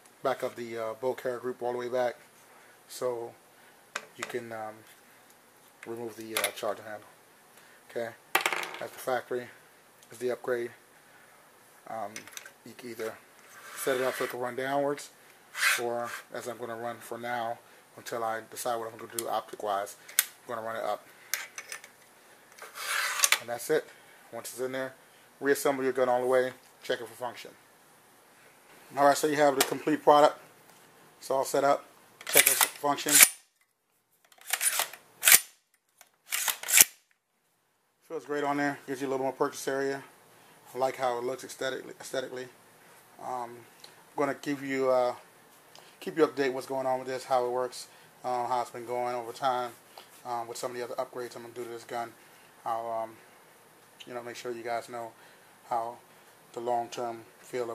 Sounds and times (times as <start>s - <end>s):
Inside, small room: 0.0s - 57.7s
Speech: 0.2s - 2.2s, 2.9s - 3.4s, 4.1s - 4.9s, 5.8s - 7.1s, 7.9s - 8.2s, 8.8s - 10.8s, 11.8s - 13.2s, 13.8s - 15.2s, 15.8s - 21.1s, 23.4s - 27.6s, 28.9s - 30.4s, 31.2s - 33.2s, 38.0s - 40.1s, 40.7s - 42.6s, 43.2s - 45.3s, 46.0s - 53.2s, 54.0s - 57.7s.